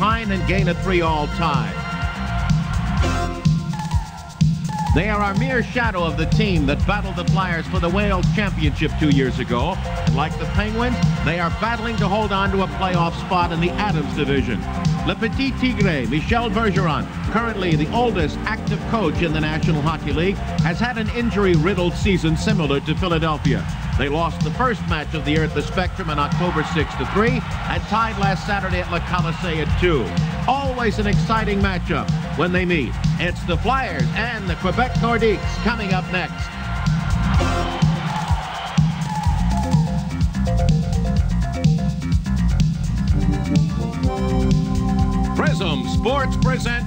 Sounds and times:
Speech: 0.0s - 1.8s, 4.9s - 36.5s, 45.4s - 46.8s.

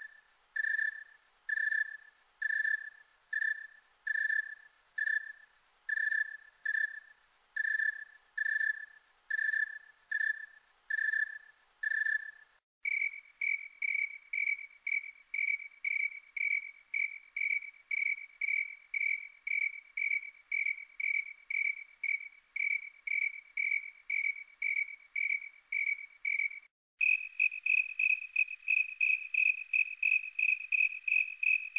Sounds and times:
Cricket: 0.0s - 31.7s.

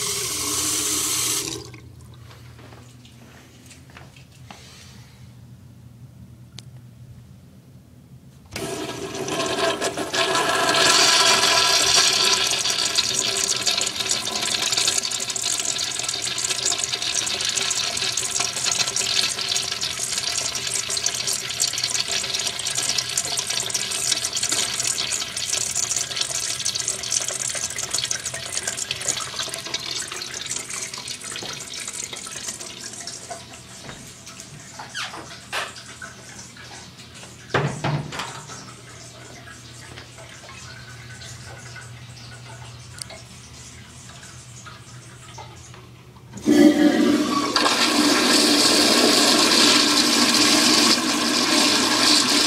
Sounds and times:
Toilet flush: 0.0s - 2.0s, 8.5s - 52.4s.

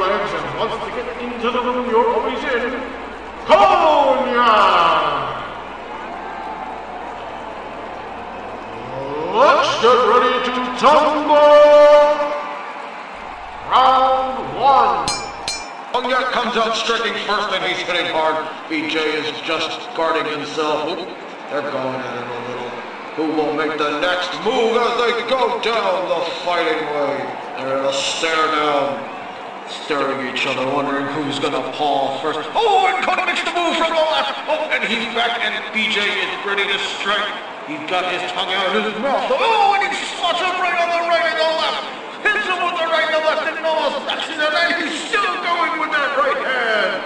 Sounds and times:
Speech: 0.0s - 2.9s, 3.5s - 5.4s, 9.2s - 12.4s, 16.0s - 29.0s, 29.7s - 47.0s.

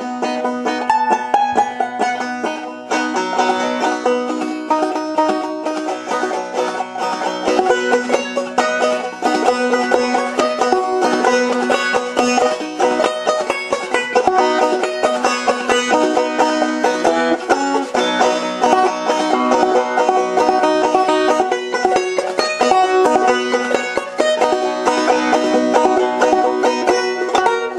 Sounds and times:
Banjo: 0.0s - 27.7s.

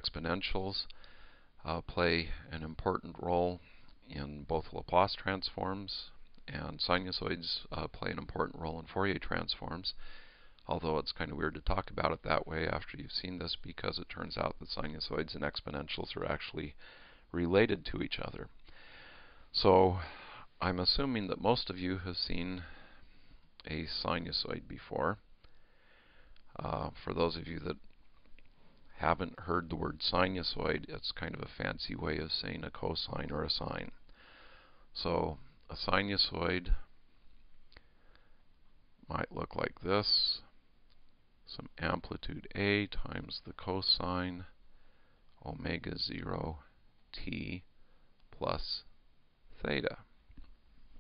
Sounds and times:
Speech: 0.0s - 1.0s, 1.6s - 10.0s, 10.6s - 18.6s, 19.5s - 22.8s, 23.6s - 25.3s, 26.5s - 27.9s, 28.9s - 34.0s, 35.0s - 36.9s, 39.0s - 40.6s, 41.5s - 44.6s, 45.4s - 47.7s, 48.3s - 50.2s.

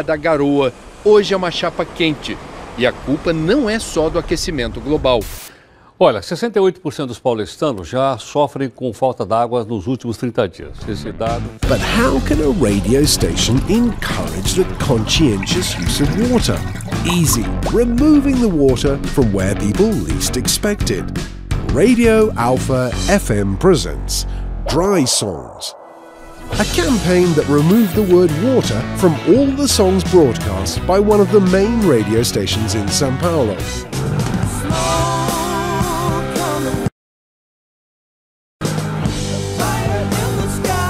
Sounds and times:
Speech: 0.0s - 25.8s, 26.6s - 33.8s
Music: 10.7s - 25.1s, 25.8s - 36.9s, 38.6s - 40.8s.

